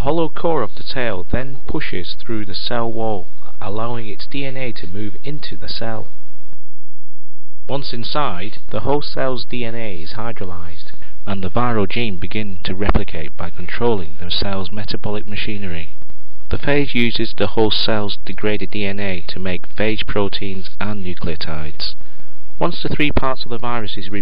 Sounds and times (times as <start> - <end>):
Speech: 0.0 - 6.1, 7.7 - 22.0, 22.6 - 24.2.